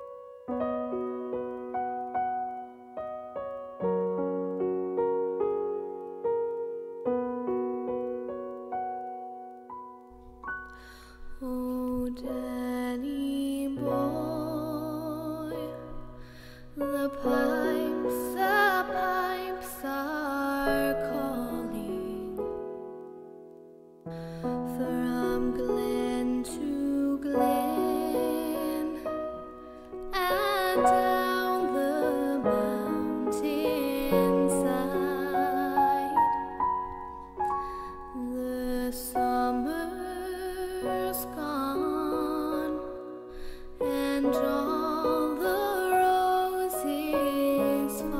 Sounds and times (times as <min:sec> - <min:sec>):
Music: 0:00.0 - 0:48.1
Female singing: 0:11.4 - 0:16.0, 0:16.8 - 0:22.4, 0:24.7 - 0:29.4, 0:30.1 - 0:36.5, 0:38.2 - 0:43.0, 0:43.8 - 0:48.1.